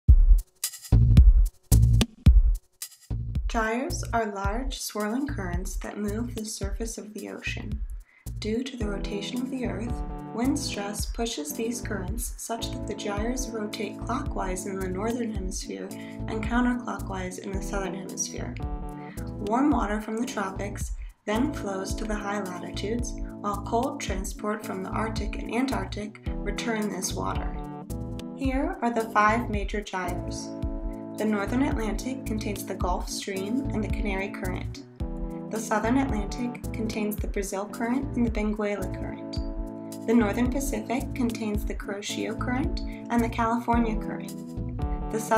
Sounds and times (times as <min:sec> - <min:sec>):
Drum machine: 0:00.0 - 0:03.7, 0:07.7 - 0:08.0, 0:09.9 - 0:10.2, 0:12.0 - 0:12.4, 0:13.2 - 0:13.4, 0:14.3 - 0:14.6, 0:18.6 - 0:20.0, 0:20.8 - 0:21.1, 0:26.3 - 0:26.6, 0:27.3 - 0:28.7, 0:30.6 - 0:31.0, 0:32.8 - 0:33.1, 0:35.0 - 0:36.4, 0:42.6 - 0:42.9, 0:43.7 - 0:45.3
Speech: 0:03.5 - 0:07.8, 0:08.4 - 0:18.6, 0:19.2 - 0:27.6, 0:28.4 - 0:30.5, 0:31.2 - 0:34.8, 0:35.5 - 0:39.4, 0:40.1 - 0:44.3, 0:45.1 - 0:45.3.